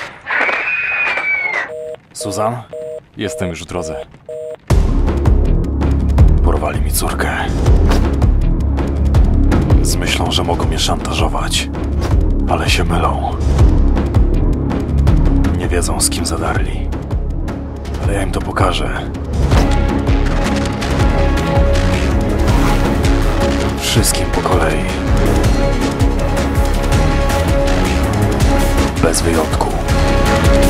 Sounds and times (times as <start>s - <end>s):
Speech: 2.2s - 4.1s, 6.4s - 7.6s, 9.8s - 11.7s, 12.5s - 13.4s, 15.5s - 16.9s, 18.0s - 19.2s, 23.8s - 25.0s, 29.0s - 29.9s
Music: 4.7s - 30.7s.